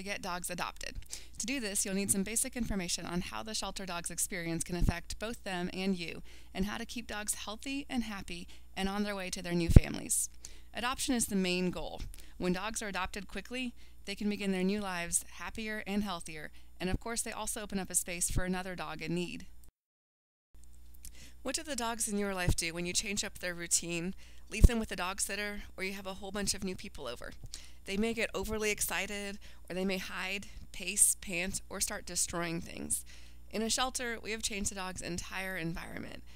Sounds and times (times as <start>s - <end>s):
Speech: 0.0s - 19.5s, 21.5s - 36.2s.